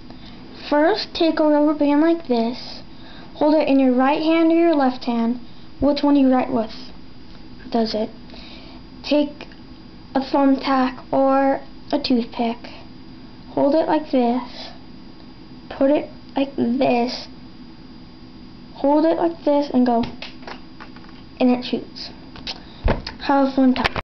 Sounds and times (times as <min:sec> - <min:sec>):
Speech: 0:00.6 - 0:02.8, 0:03.4 - 0:07.0, 0:07.7 - 0:08.2, 0:09.0 - 0:09.5, 0:10.2 - 0:12.8, 0:13.6 - 0:14.8, 0:15.7 - 0:17.3, 0:18.8 - 0:20.2, 0:21.4 - 0:22.2, 0:23.2 - 0:24.0.